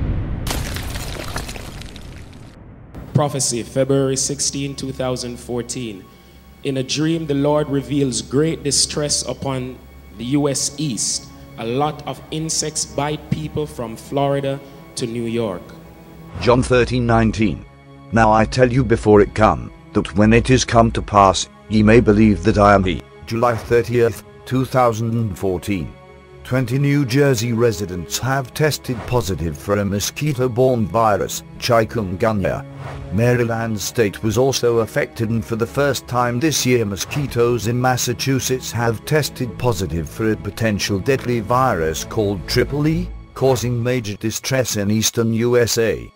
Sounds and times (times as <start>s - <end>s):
Music: 2.8s - 46.1s
Speech: 3.1s - 15.8s, 16.4s - 46.1s.